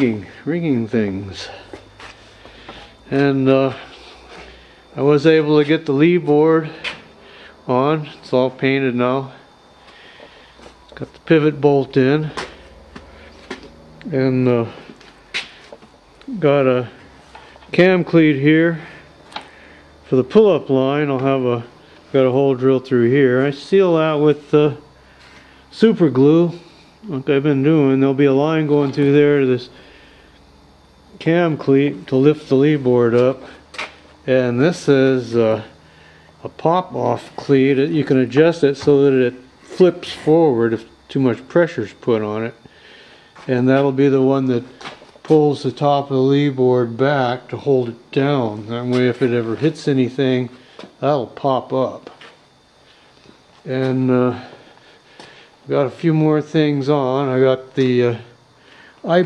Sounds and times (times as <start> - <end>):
Speech: 0.0 - 1.6, 3.1 - 3.9, 5.0 - 6.9, 7.7 - 9.4, 11.0 - 12.4, 14.0 - 14.8, 16.2 - 17.0, 17.7 - 19.0, 20.1 - 24.8, 25.7 - 29.8, 31.2 - 33.6, 34.2 - 35.7, 36.4 - 42.6, 43.5 - 52.2, 53.6 - 54.5, 55.7 - 58.4, 59.0 - 59.2.